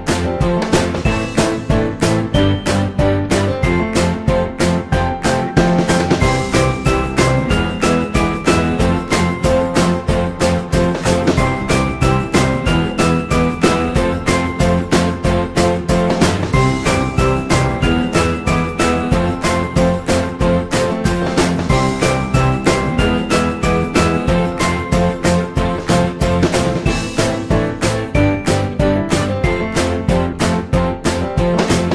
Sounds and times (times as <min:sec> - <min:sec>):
Music: 0:00.0 - 0:31.9.